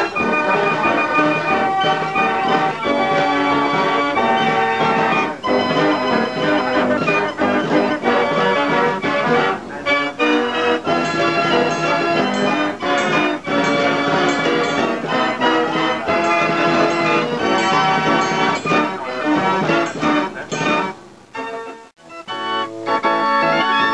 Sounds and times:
Music: 0.0 - 23.9.

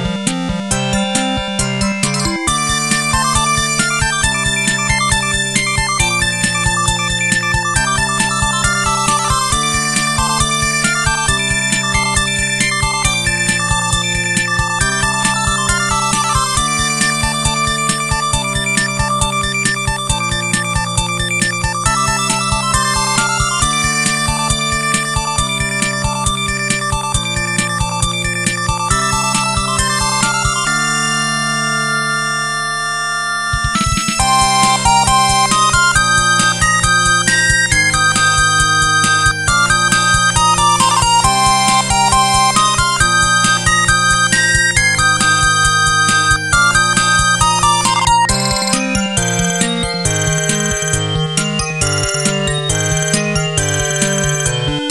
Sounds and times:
Music: 0.0 - 54.9.

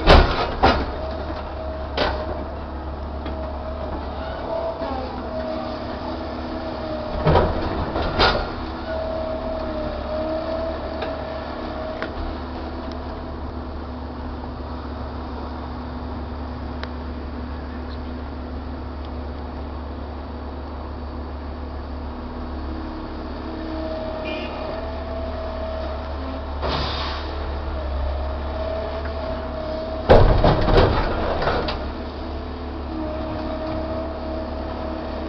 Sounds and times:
Vehicle: 0.0 - 35.2.

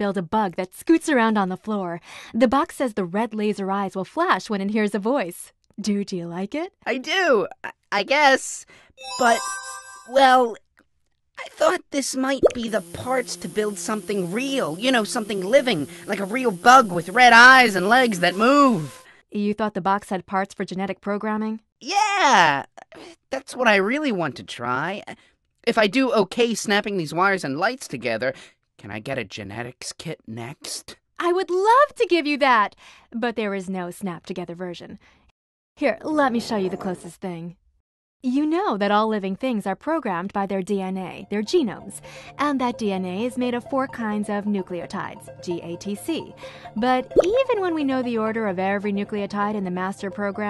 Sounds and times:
Speech: 0.0 - 8.6, 9.2 - 9.4, 10.1 - 10.6, 11.4 - 22.7, 23.3 - 35.0, 35.8 - 37.6, 38.3 - 50.4.

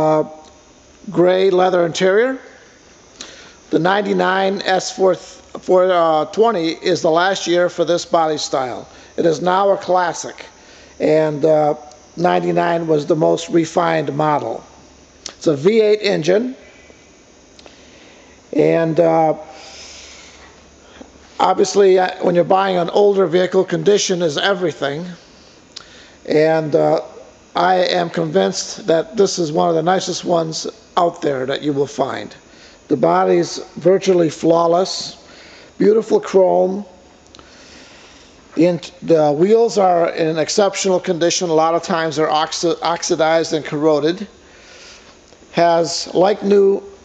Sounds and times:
Speech: 0.0 - 2.6, 3.7 - 14.7, 15.3 - 16.7, 18.5 - 19.6, 21.4 - 25.2, 26.2 - 37.0, 38.6 - 44.4, 45.5 - 47.0.

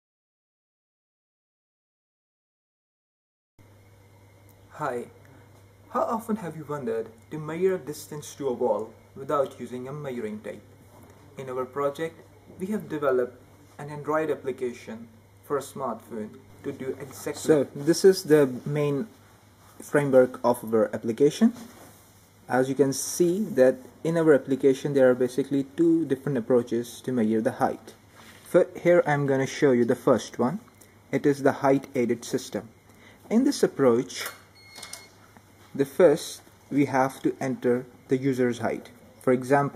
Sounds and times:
Speech: 4.7 - 5.2, 5.9 - 10.7, 11.4 - 19.2, 19.8 - 21.7, 22.5 - 32.7, 33.3 - 34.4, 35.8 - 39.7.

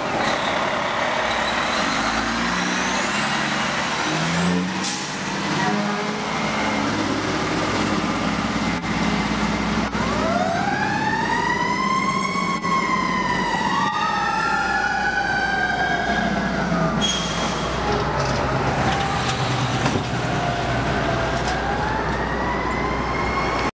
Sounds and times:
Heavy engine (low frequency): 0.0 - 23.7.

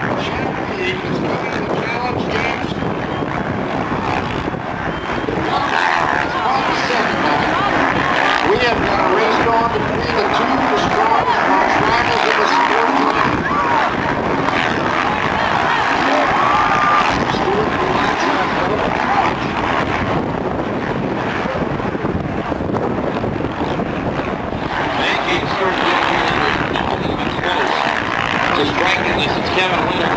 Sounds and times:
Race car, auto racing: 0.0 - 30.1
Wind noise (microphone): 0.0 - 30.1
Speech: 25.0 - 30.1.

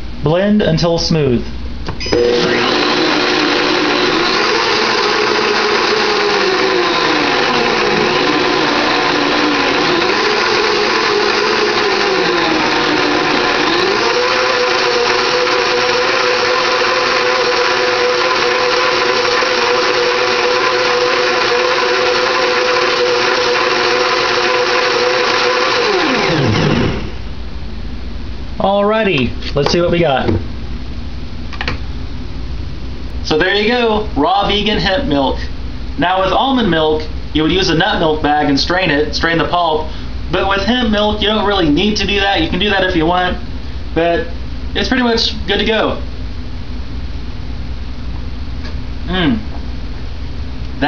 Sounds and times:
Blender: 2.0 - 27.2.

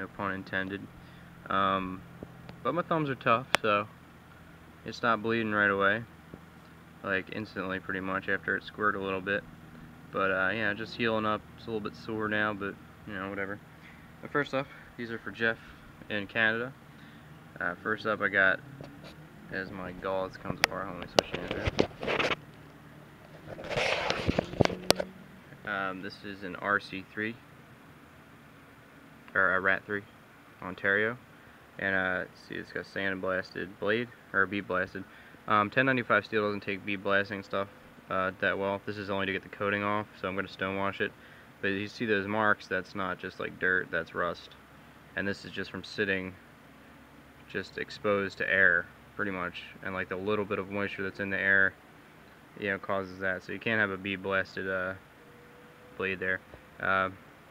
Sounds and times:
Speech: 0.0 - 0.9, 1.5 - 2.0, 2.6 - 3.9, 4.8 - 6.1, 7.0 - 9.4, 10.1 - 13.6, 14.2 - 16.8, 17.6 - 18.6, 19.5 - 21.9, 25.6 - 27.4, 29.3 - 31.2, 31.8 - 44.6, 45.2 - 46.4, 47.5 - 51.8, 52.6 - 55.0, 56.0 - 57.2.

